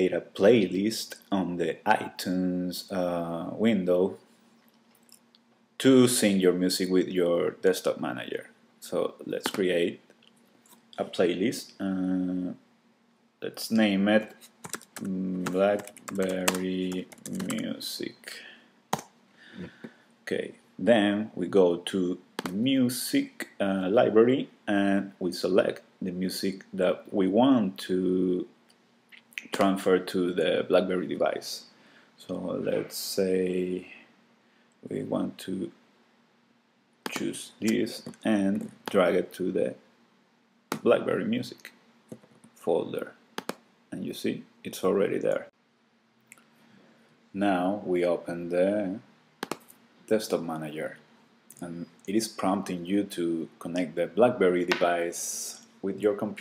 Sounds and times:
Speech: 0:00.0 - 0:04.2, 0:05.8 - 0:10.0, 0:11.0 - 0:12.6, 0:13.4 - 0:14.4, 0:15.0 - 0:18.6, 0:20.3 - 0:28.5, 0:29.4 - 0:34.1, 0:34.8 - 0:35.8, 0:37.1 - 0:39.8, 0:40.8 - 0:41.8, 0:42.6 - 0:43.2, 0:43.9 - 0:45.6, 0:47.4 - 0:49.1, 0:50.1 - 0:56.4.

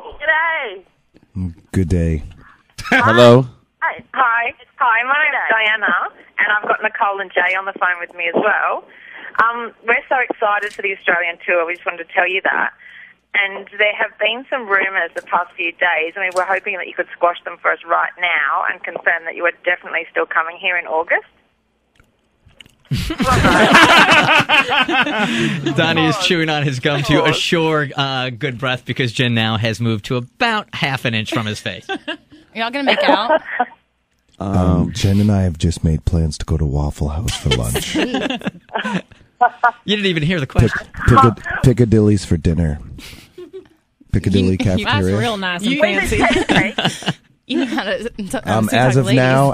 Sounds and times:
Speech: 0:01.3 - 0:04.3, 0:25.3 - 0:32.0, 0:32.6 - 0:33.5, 0:34.4 - 0:43.0, 0:44.1 - 0:49.5.

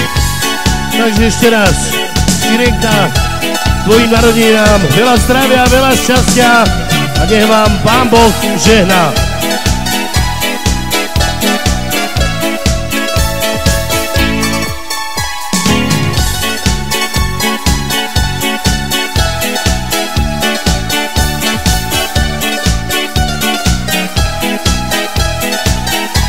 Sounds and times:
Music: 0:00.0 - 0:26.2.

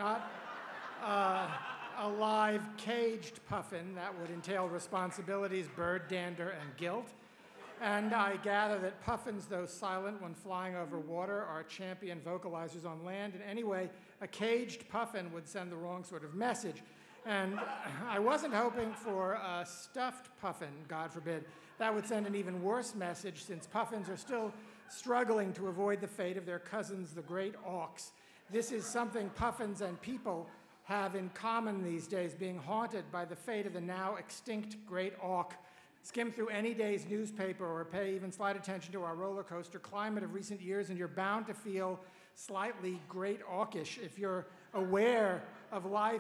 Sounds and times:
Male speech, man speaking: 0:00.0 - 0:00.3, 0:01.0 - 0:46.2
Narration, monologue: 0:00.0 - 0:46.2.

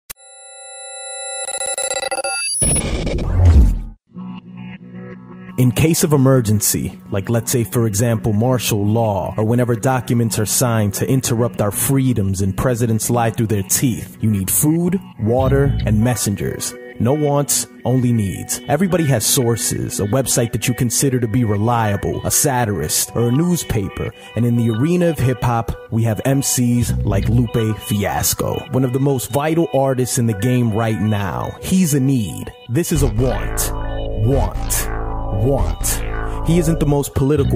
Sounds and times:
Music: 0:04.0 - 0:37.5.

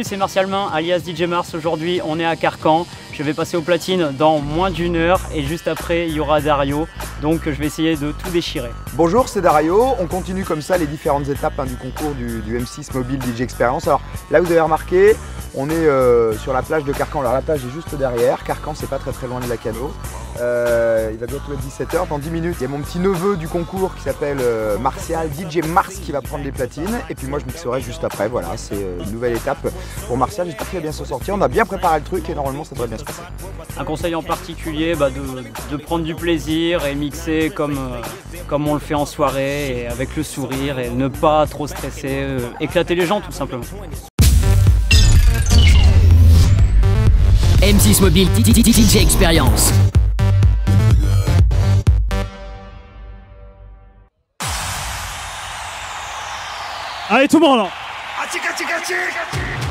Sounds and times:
Speech: 0:00.0 - 0:44.1, 0:47.6 - 0:49.8, 0:57.1 - 0:59.7
Music: 0:00.0 - 0:59.7.

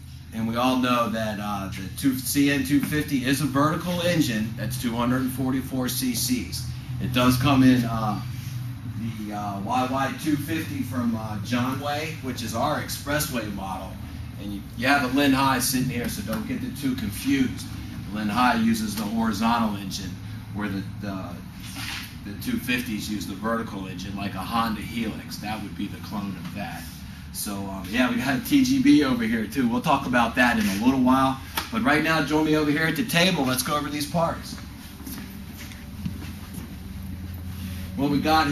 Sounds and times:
Speech: 0:00.3 - 0:08.3, 0:09.0 - 0:21.4, 0:22.2 - 0:34.6, 0:38.0 - 0:38.5.

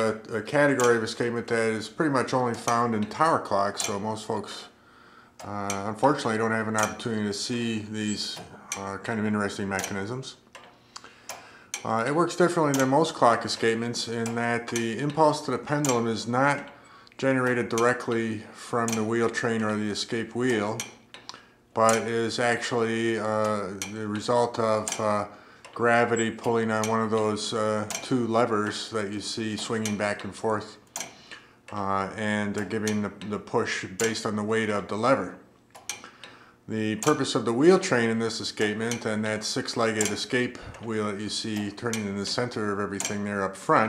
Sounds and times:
Tick-tock: 0:00.0 - 0:01.6, 0:02.2 - 0:04.1, 0:05.4 - 0:07.2, 0:08.0 - 0:43.8
Speech: 0:00.0 - 0:04.8, 0:05.4 - 0:10.4, 0:11.8 - 0:20.9, 0:21.8 - 0:30.8, 0:31.7 - 0:35.4, 0:36.7 - 0:43.8.

